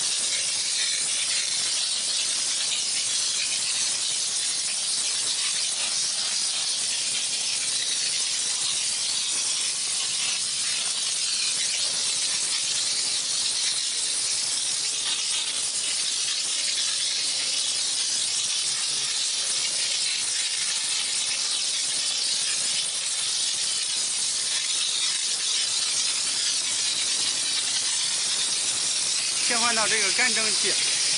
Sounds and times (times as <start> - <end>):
Steam: 0.0 - 31.1.